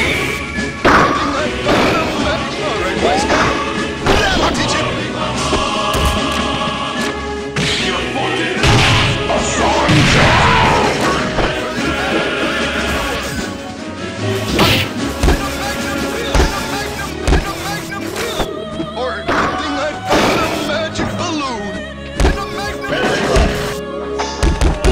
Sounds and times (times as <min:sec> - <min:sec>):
Music: 0:00.0 - 0:24.9.